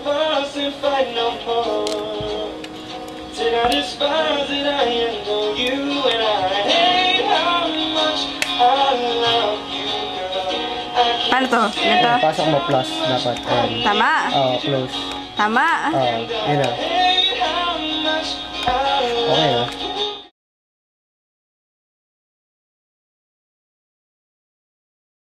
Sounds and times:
Music: 0.0s - 20.3s
Speech: 19.3s - 19.7s.

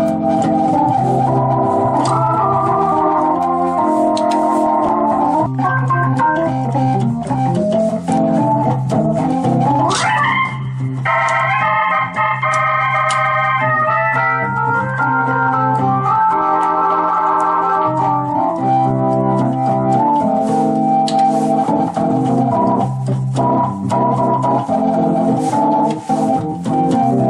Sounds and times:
Electric piano: 0.0s - 27.2s
Electronic organ: 0.0s - 27.2s.

